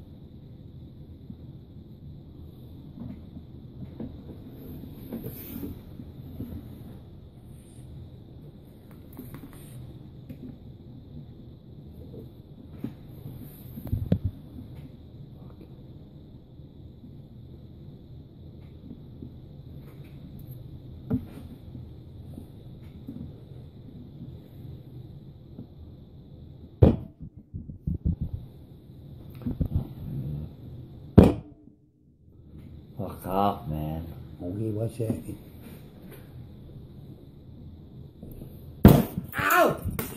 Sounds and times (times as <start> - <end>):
Speech: 33.0 - 35.4.